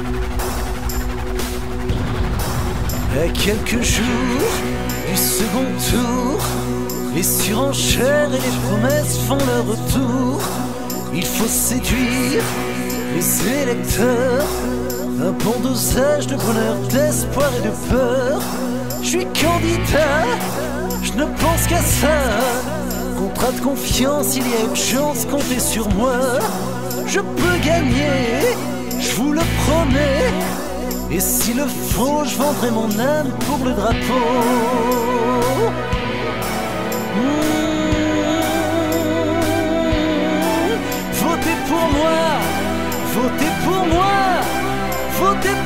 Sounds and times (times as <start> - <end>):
Music: 0.0 - 45.6.